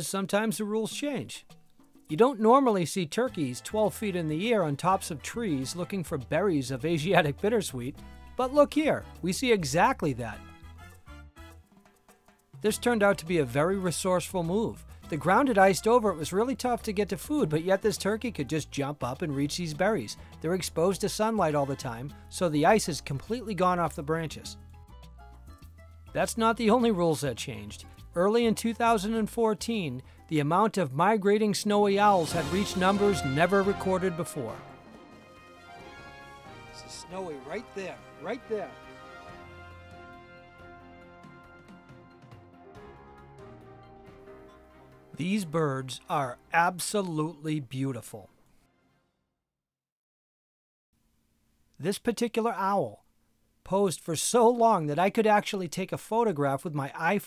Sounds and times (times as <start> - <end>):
Speech: 0.0 - 1.5, 2.1 - 10.4, 12.6 - 24.6, 26.2 - 34.6, 36.8 - 38.8, 45.2 - 48.3, 51.8 - 53.0, 53.7 - 57.2
Music: 0.0 - 49.4.